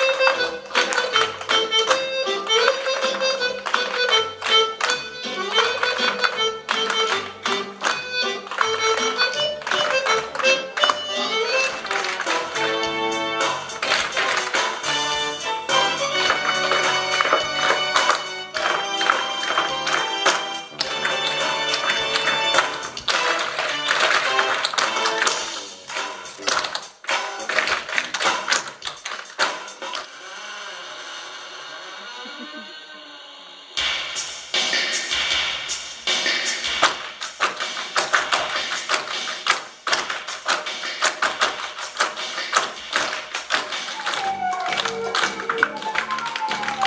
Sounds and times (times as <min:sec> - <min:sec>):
Music: 0:00.0 - 0:46.8.